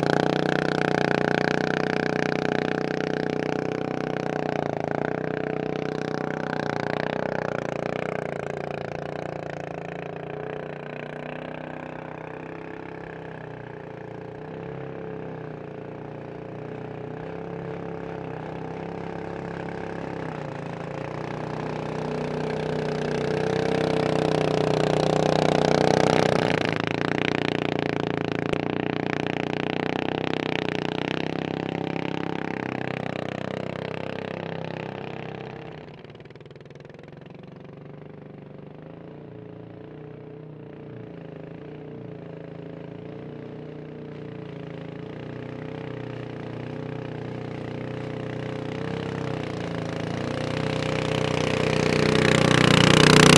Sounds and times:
Motorboat, speedboat: 0:00.0 - 0:53.3.

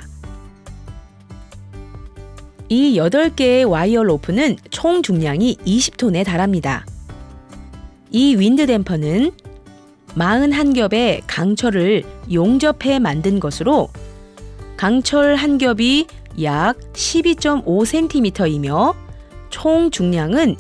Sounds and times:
Music: 0:00.0 - 0:20.6
Speech: 0:02.7 - 0:06.9, 0:08.1 - 0:09.4, 0:10.2 - 0:13.9, 0:14.8 - 0:19.0, 0:19.6 - 0:20.6.

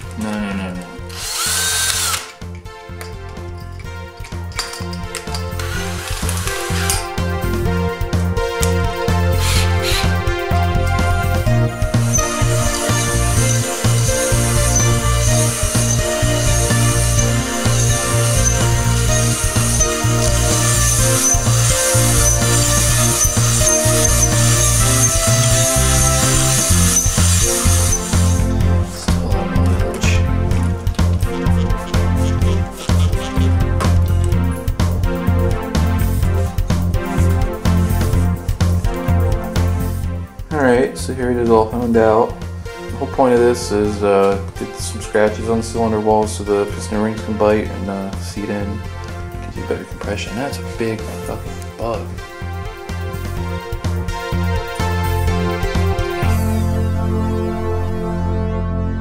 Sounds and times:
Music: 0:00.0 - 0:59.0.

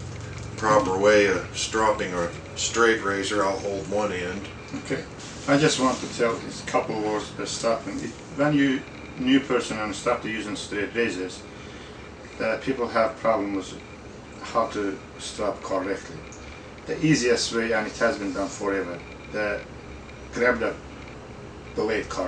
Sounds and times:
Speech: 0:00.6 - 0:11.4, 0:12.4 - 0:13.8, 0:14.4 - 0:19.7, 0:20.4 - 0:20.8, 0:21.8 - 0:22.2.

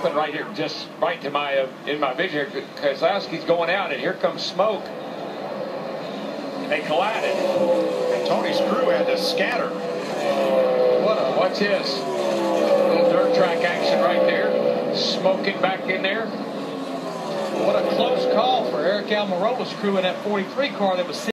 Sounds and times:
Speech: 0:00.0 - 0:04.9, 0:06.7 - 0:07.6, 0:08.2 - 0:09.8, 0:12.9 - 0:16.3, 0:17.6 - 0:21.3
Skidding: 0:01.7 - 0:21.3.

